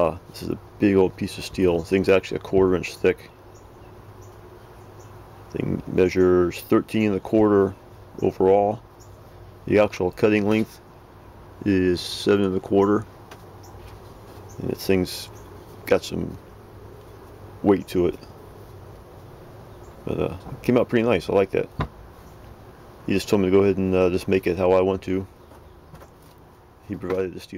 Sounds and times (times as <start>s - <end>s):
Speech: 0.0s - 3.3s, 5.5s - 8.8s, 9.6s - 10.8s, 11.6s - 13.1s, 14.6s - 16.4s, 17.6s - 18.3s, 20.0s - 21.8s, 23.0s - 25.3s, 26.8s - 27.5s.